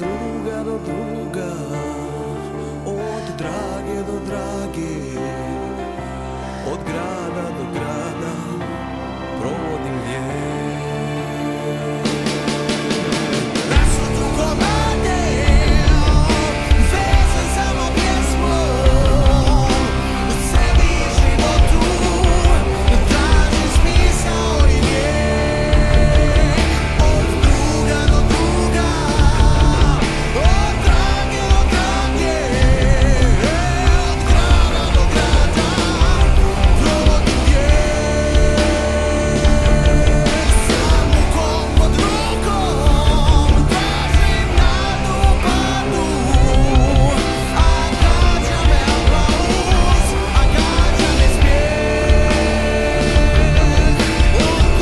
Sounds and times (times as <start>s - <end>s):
Music: 0.0s - 54.8s.